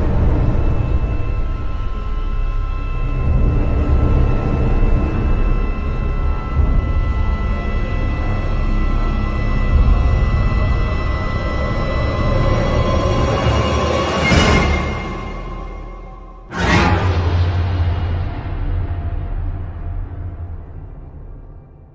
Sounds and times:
Music: 0:00.0 - 0:21.9.

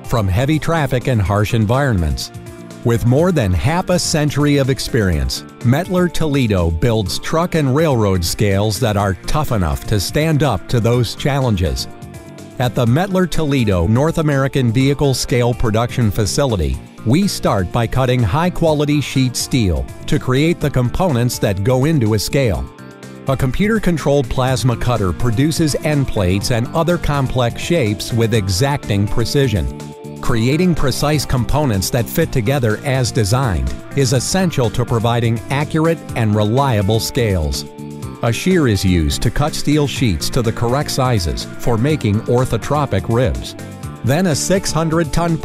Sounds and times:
Speech: 0:00.0 - 0:11.9, 0:12.6 - 0:22.7, 0:23.3 - 0:45.4
Music: 0:00.0 - 0:45.4.

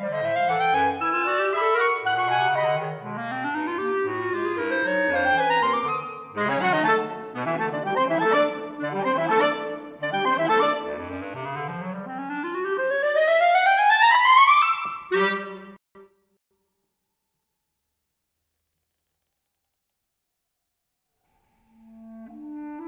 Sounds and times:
Clarinet: 0:00.0 - 0:15.8, 0:21.7 - 0:22.8.

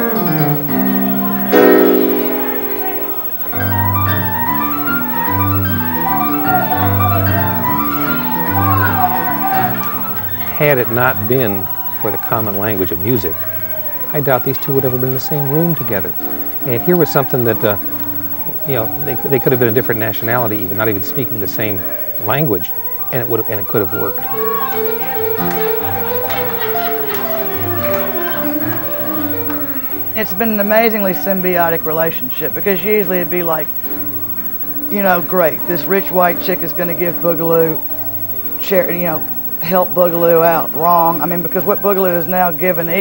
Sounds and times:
Music: 0:00.0 - 0:43.0
Speech: 0:10.4 - 0:13.5, 0:14.1 - 0:17.8, 0:18.5 - 0:24.2, 0:30.0 - 0:33.7, 0:34.9 - 0:37.8, 0:38.6 - 0:43.0.

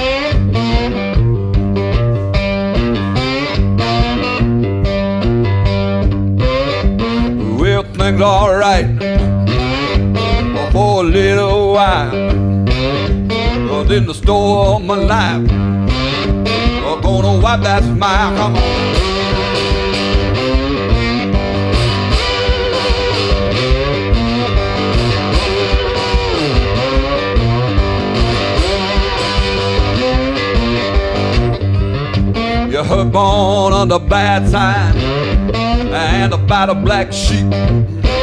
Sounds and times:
Music: 0:00.0 - 0:38.2.

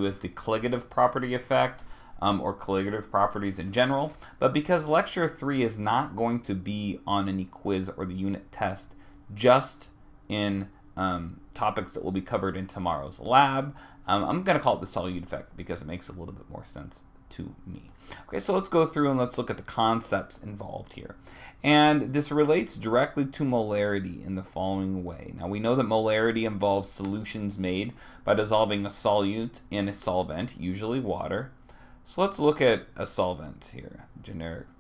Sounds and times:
Speech: 0:00.0 - 0:34.8.

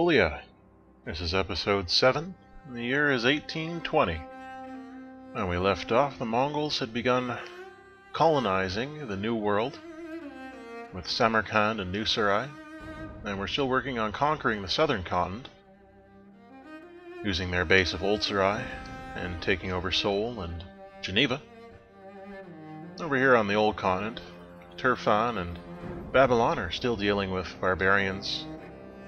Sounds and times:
Cello: 0:00.0 - 0:29.0.

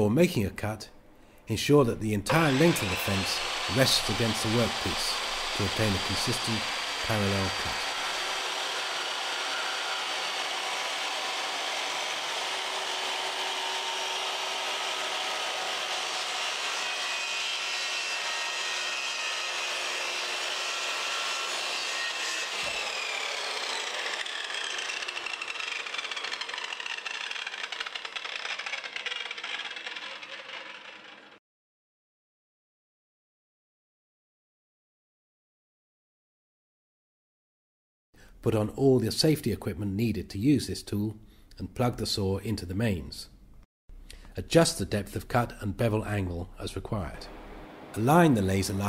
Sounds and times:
Power tool: 0:02.3 - 0:31.4, 0:47.2 - 0:48.8.

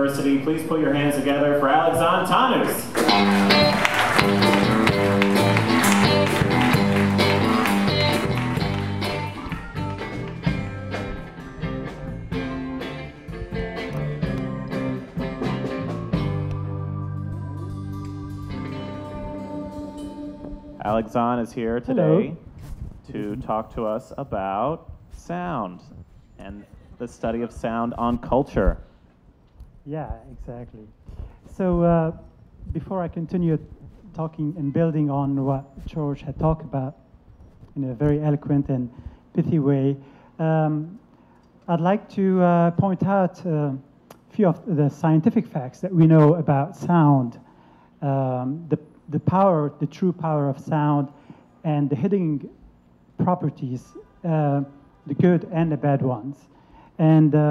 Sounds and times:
Speech: 0:00.0 - 0:03.0, 0:20.8 - 0:22.4, 0:23.1 - 0:28.8, 0:29.9 - 0:30.9, 0:31.5 - 0:37.0, 0:37.8 - 0:41.0, 0:41.7 - 0:47.4, 0:48.0 - 0:51.1, 0:51.7 - 0:52.6, 0:53.2 - 0:57.5.

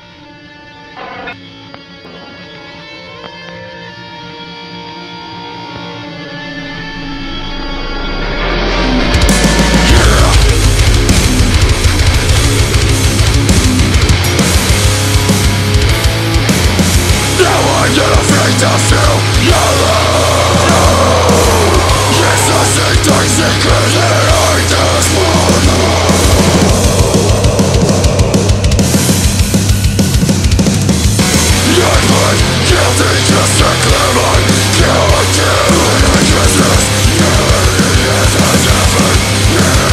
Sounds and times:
Music: 0:00.0 - 0:39.9.

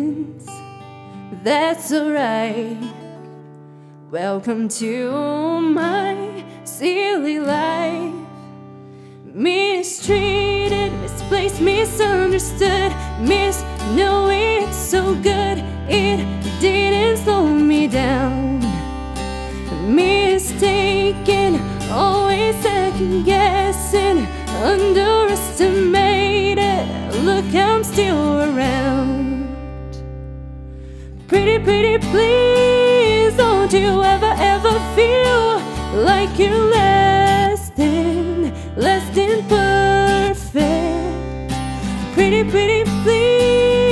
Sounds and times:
Female singing: 0:00.0 - 0:00.5, 0:01.3 - 0:03.0, 0:04.1 - 0:08.3, 0:09.3 - 0:18.8, 0:19.7 - 0:29.6, 0:31.3 - 0:41.3, 0:42.1 - 0:43.9
Music: 0:00.0 - 0:43.9.

